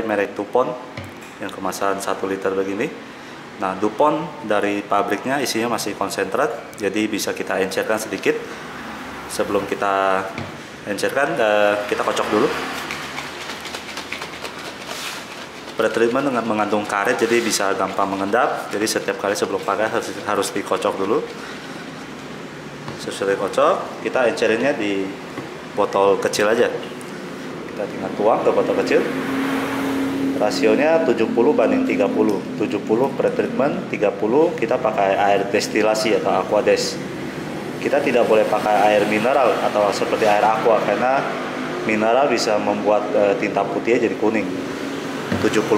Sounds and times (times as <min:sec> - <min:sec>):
Speech: 0:00.0 - 0:00.8, 0:01.4 - 0:03.0, 0:03.6 - 0:08.4, 0:09.3 - 0:12.6, 0:15.8 - 0:21.3, 0:23.0 - 0:25.2, 0:25.8 - 0:26.8, 0:27.8 - 0:29.1, 0:30.4 - 0:37.0, 0:37.8 - 0:41.3, 0:41.9 - 0:44.6, 0:45.3 - 0:45.7.